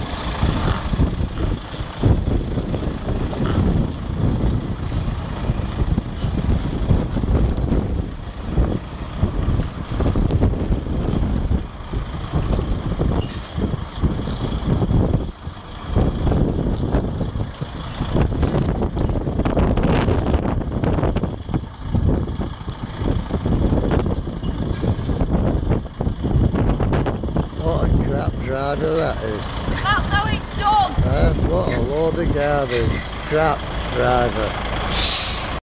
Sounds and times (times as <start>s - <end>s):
Truck: 0.0s - 35.6s
Speech: 27.6s - 34.5s.